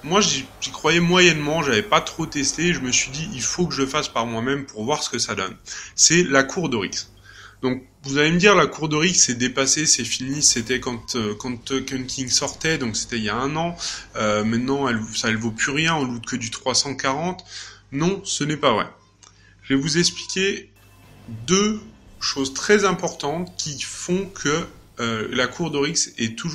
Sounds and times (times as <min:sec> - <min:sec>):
Speech: 0:00.0 - 0:19.0, 0:19.7 - 0:20.7, 0:21.3 - 0:26.5.